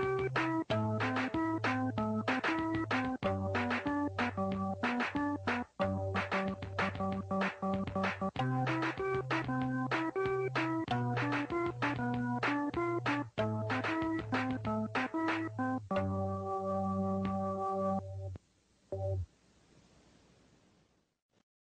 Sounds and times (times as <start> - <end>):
Music: 0.0 - 19.3.